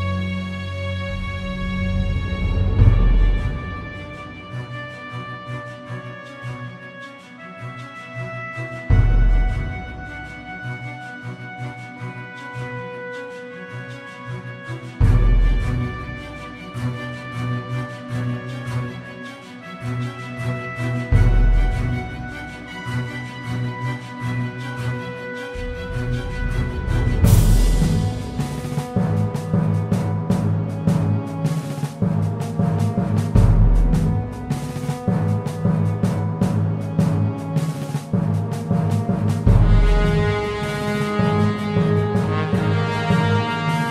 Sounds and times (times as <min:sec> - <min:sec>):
Orchestra: 0:00.0 - 0:43.9.